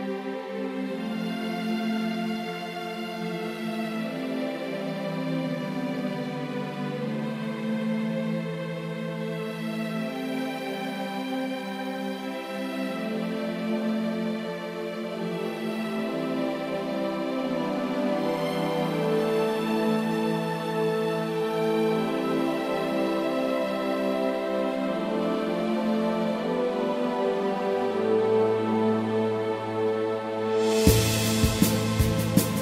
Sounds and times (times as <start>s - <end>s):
Happy music: 0.0s - 32.6s.